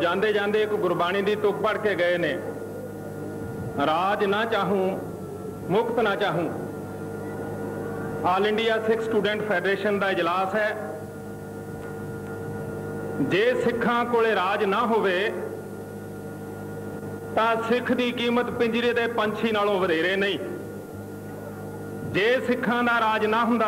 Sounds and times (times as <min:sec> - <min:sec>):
Male speech, man speaking: 0:00.0 - 0:02.6, 0:03.8 - 0:05.1, 0:05.7 - 0:06.6, 0:08.2 - 0:11.0, 0:13.2 - 0:15.6, 0:17.4 - 0:20.6, 0:22.1 - 0:23.6
Narration, monologue: 0:00.0 - 0:23.6.